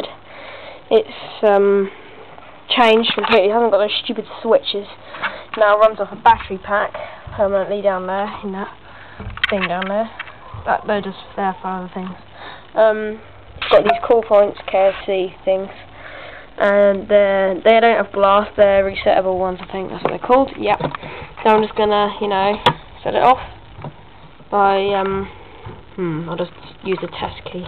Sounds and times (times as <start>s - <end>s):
Speech: 0.9s - 1.9s, 2.7s - 5.0s, 5.6s - 8.8s, 9.5s - 12.2s, 12.8s - 15.8s, 16.6s - 23.5s, 24.5s - 25.3s, 26.0s - 27.6s.